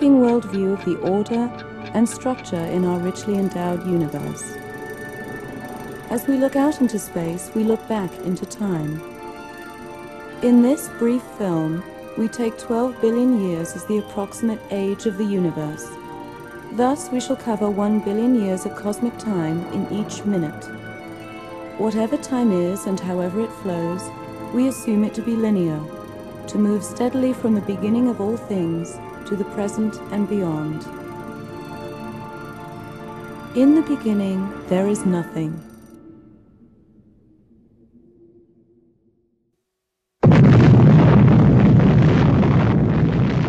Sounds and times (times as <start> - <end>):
Speech: 0.0 - 4.5, 6.1 - 9.0, 10.4 - 16.0, 16.8 - 20.7, 21.8 - 25.9, 26.5 - 30.9, 33.6 - 35.6
Music: 0.0 - 37.0.